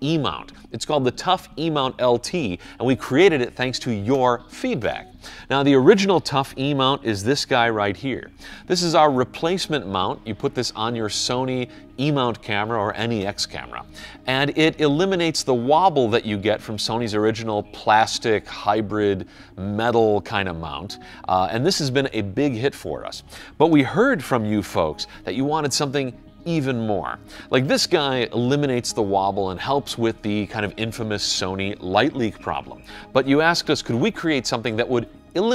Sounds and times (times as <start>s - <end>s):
Music: 0.0s - 35.5s
Speech: 0.0s - 35.5s.